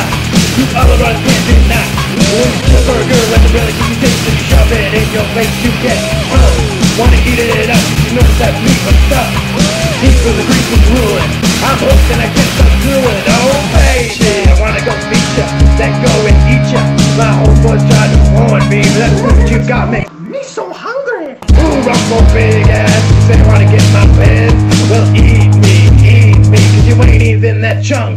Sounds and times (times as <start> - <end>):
Music: 0.0 - 20.2, 20.9 - 28.1.